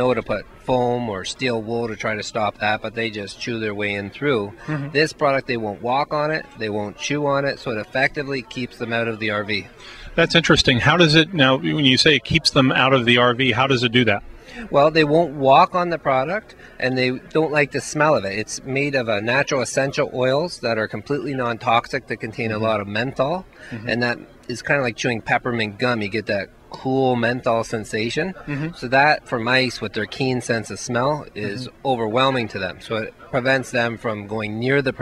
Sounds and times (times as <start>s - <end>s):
Speech: 0.0s - 35.0s.